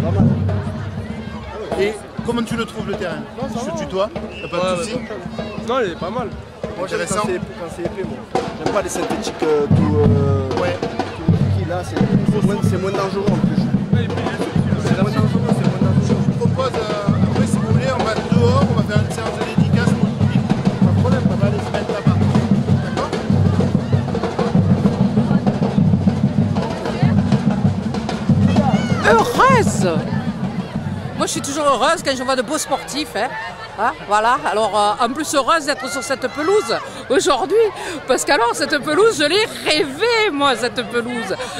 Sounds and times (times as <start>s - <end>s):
Music: 0.0s - 33.2s.